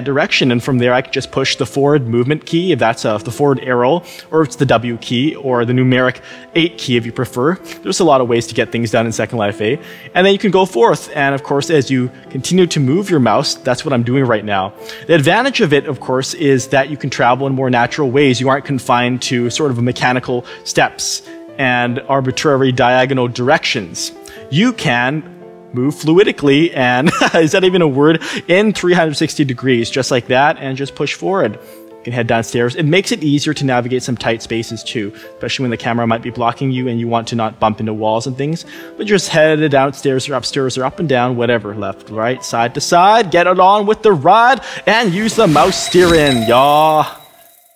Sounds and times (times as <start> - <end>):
Speech: 0.0 - 47.2
Music: 0.0 - 47.7.